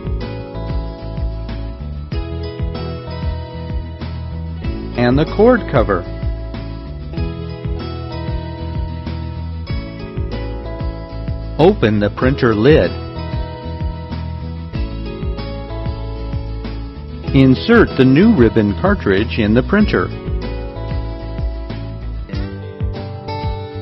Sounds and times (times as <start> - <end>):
Music: 0.0 - 23.8
Speech: 5.0 - 6.1, 11.6 - 13.0, 17.3 - 20.1.